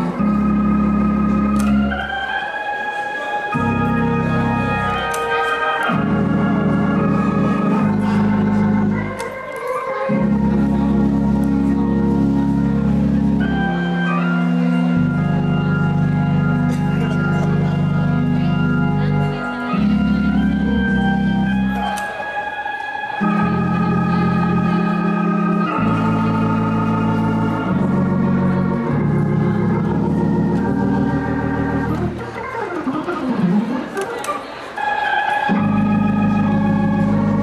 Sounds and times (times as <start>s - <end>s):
Gospel music: 0.0s - 37.4s
Speech: 2.2s - 29.7s.